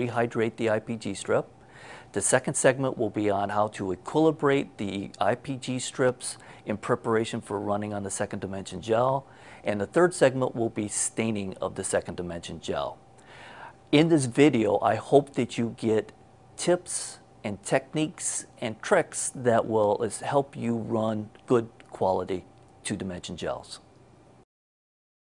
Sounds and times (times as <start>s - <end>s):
Speech: 0.0s - 1.5s, 2.1s - 13.0s, 13.9s - 23.9s.